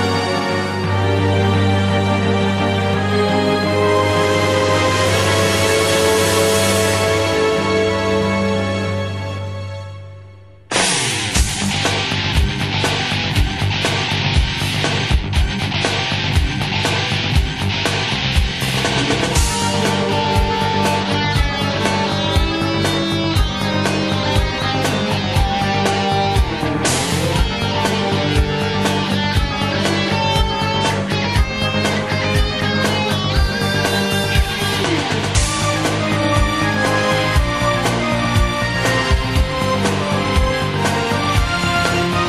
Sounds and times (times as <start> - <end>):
Rock music: 0.0 - 42.2
Theme music: 0.0 - 42.2.